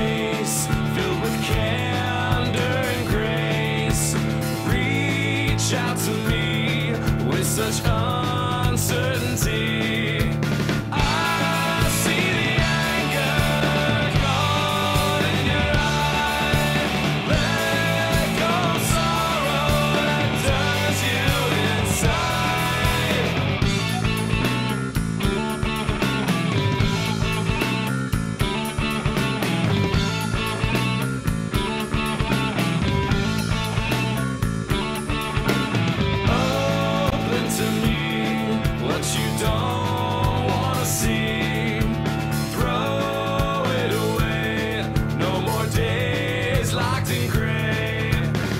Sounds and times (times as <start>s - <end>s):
Music: 0.0s - 48.5s.